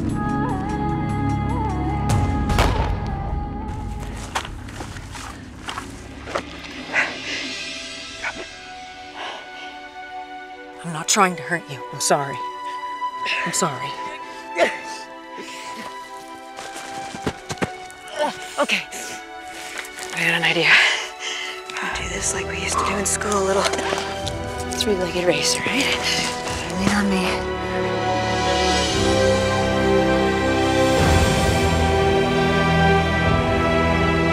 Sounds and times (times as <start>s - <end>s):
Music: 0.0s - 34.3s.